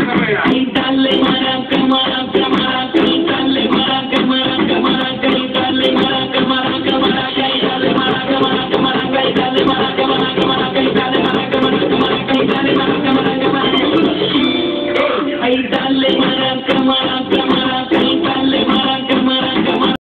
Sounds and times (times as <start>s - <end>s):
Maraca: 0.0s - 20.0s.